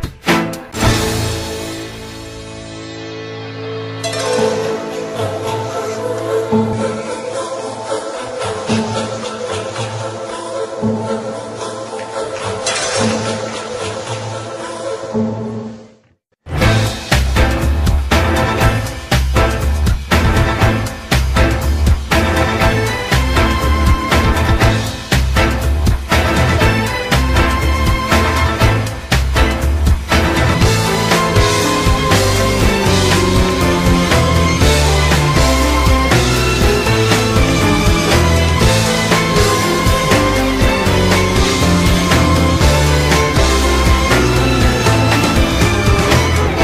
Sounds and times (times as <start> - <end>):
Soundtrack music: 0.0 - 46.6.